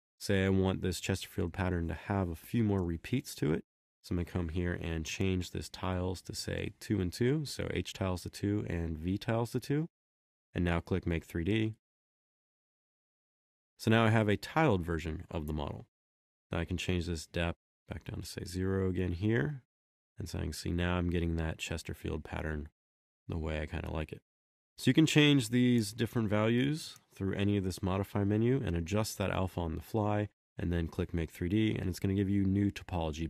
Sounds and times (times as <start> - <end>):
Speech: 0.2 - 9.9, 10.6 - 11.8, 13.8 - 15.9, 16.5 - 24.2, 24.8 - 33.2
Inside, small room: 0.2 - 10.0, 10.6 - 11.8, 13.8 - 15.9, 16.5 - 33.2.